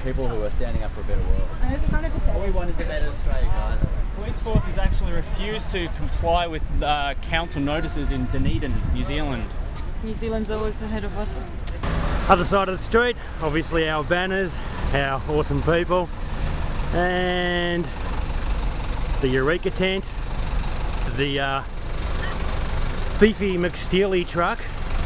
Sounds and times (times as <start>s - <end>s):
Vehicle: 0.0s - 25.0s.